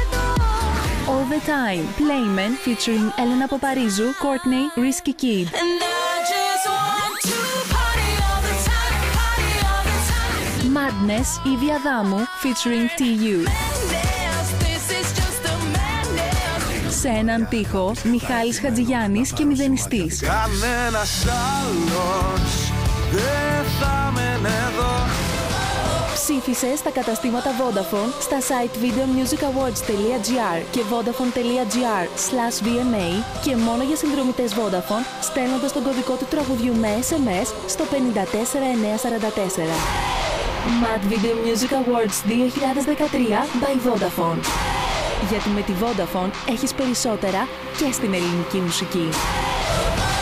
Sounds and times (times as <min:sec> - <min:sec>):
Music: 0:00.0 - 0:50.2
Speech: 0:01.1 - 0:06.0, 0:10.6 - 0:13.6, 0:16.9 - 0:20.8, 0:26.2 - 0:39.8, 0:40.7 - 0:44.5, 0:45.2 - 0:49.2.